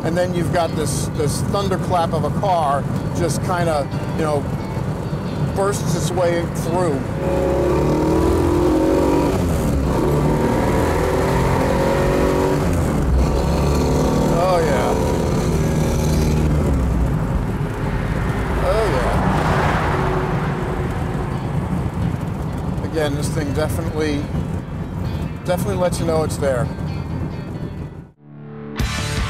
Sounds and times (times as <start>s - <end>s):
Speech: 0.0s - 4.4s, 5.6s - 7.0s, 14.4s - 15.0s, 18.6s - 19.2s, 22.9s - 24.3s, 25.5s - 26.7s
Car: 0.0s - 28.2s
Music: 2.8s - 7.2s, 22.1s - 29.3s.